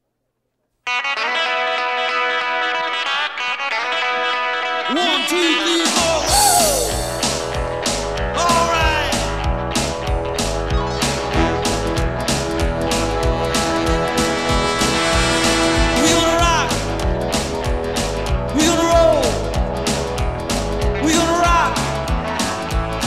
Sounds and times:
Music: 0:00.8 - 0:23.0.

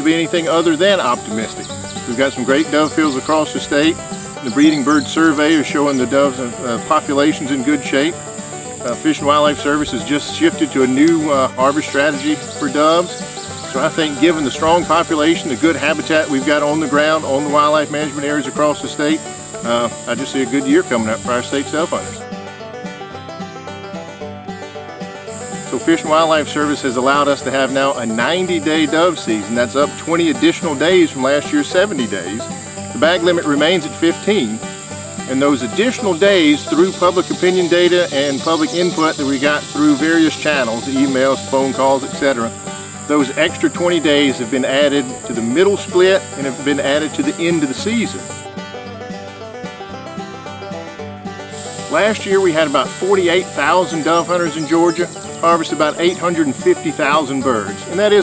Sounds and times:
Speech: 0:00.0 - 0:08.2, 0:08.8 - 0:22.2, 0:25.7 - 0:34.7, 0:35.3 - 0:48.4, 0:51.8 - 0:58.2
Music: 0:00.0 - 0:58.2.

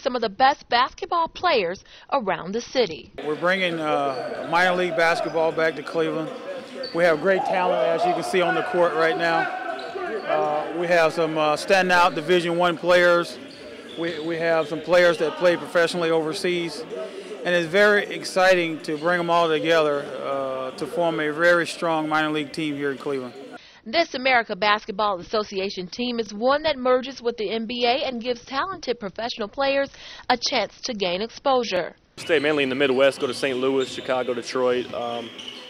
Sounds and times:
Speech: 0:00.0 - 0:13.4, 0:14.0 - 0:35.3.

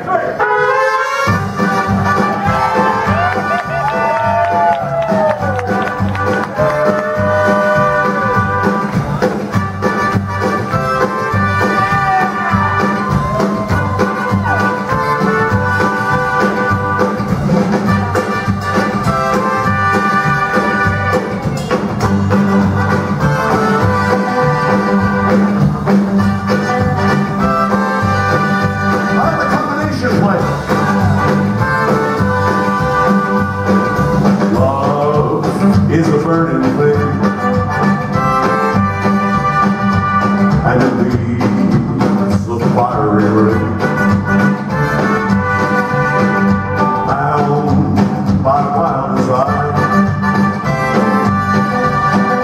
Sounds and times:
Speech: 0:00.0 - 0:00.4, 0:29.2 - 0:30.5
Orchestra: 0:00.0 - 0:52.4.

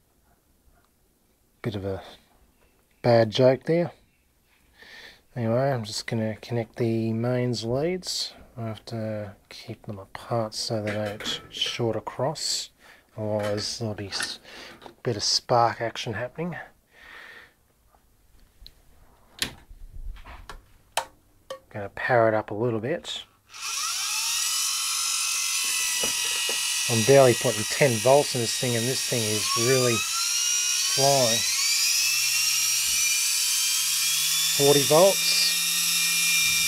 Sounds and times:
Speech: 0:01.6 - 0:02.2, 0:03.0 - 0:04.0, 0:05.4 - 0:14.4, 0:15.0 - 0:16.7, 0:21.7 - 0:23.3, 0:26.9 - 0:30.0, 0:31.0 - 0:31.5, 0:34.6 - 0:35.5.

